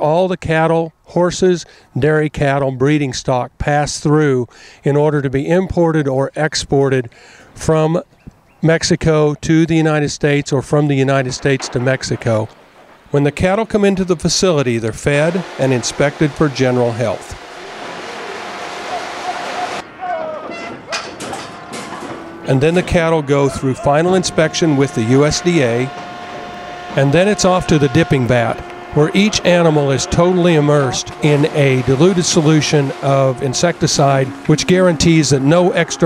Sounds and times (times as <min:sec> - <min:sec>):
Speech: 0:00.0 - 0:08.0, 0:08.6 - 0:12.5, 0:13.1 - 0:17.4, 0:22.5 - 0:25.9, 0:27.0 - 0:36.0.